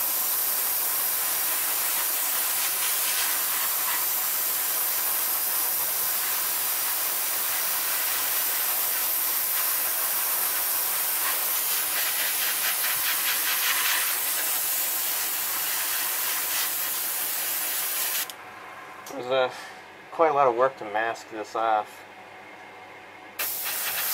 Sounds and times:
Speech: 19.1 - 22.1.

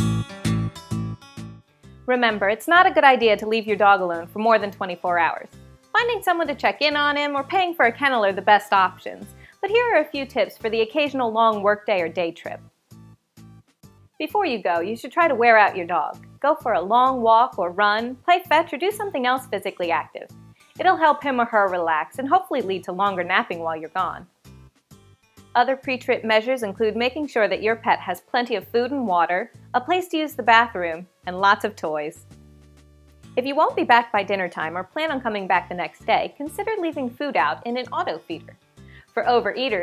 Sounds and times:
Music: 0.0 - 39.8
Speech: 2.1 - 12.6, 14.2 - 24.3, 25.6 - 32.2, 33.4 - 39.8.

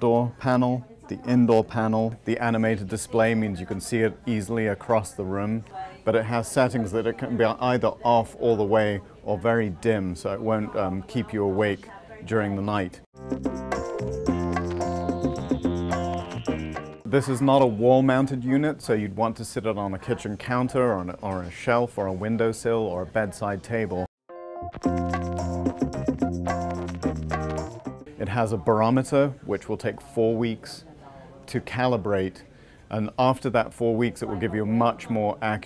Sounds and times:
Speech: 0.0 - 13.1, 17.1 - 24.1, 28.1 - 35.6.

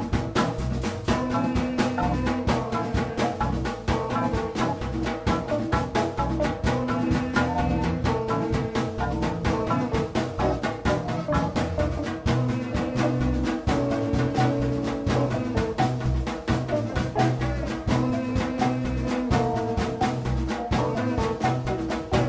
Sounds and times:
Drum: 0.0 - 22.2.

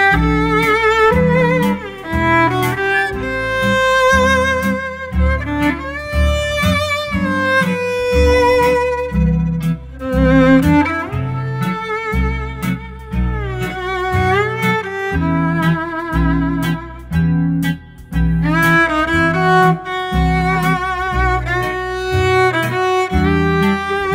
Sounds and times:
Violin, fiddle: 0.0 - 17.3, 18.4 - 24.1.

